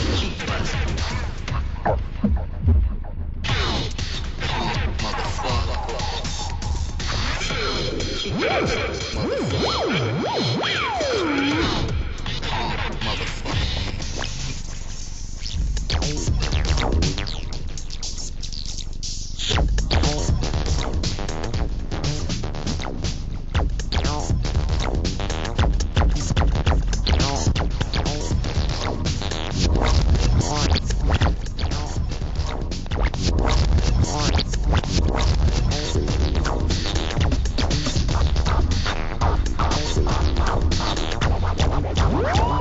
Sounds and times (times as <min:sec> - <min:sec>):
Electronic music: 0:00.0 - 0:42.6
Hip hop music: 0:00.0 - 0:42.6.